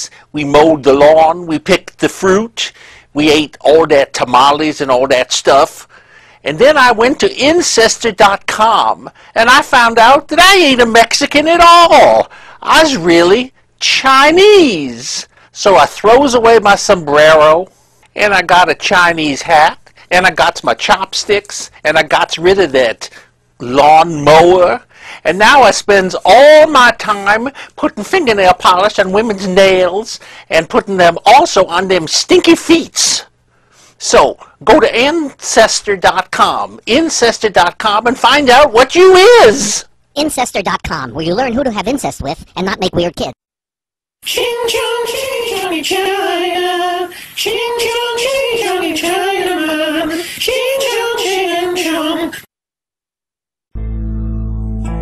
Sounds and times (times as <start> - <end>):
Music: 53.8 - 55.0.